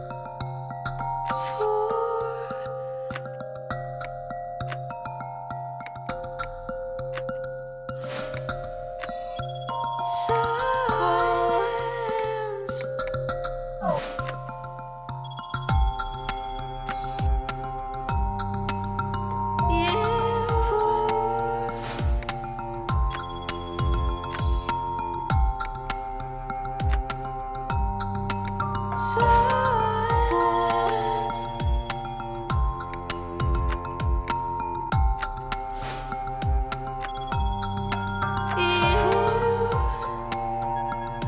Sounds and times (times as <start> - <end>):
Music: 0.0 - 41.2.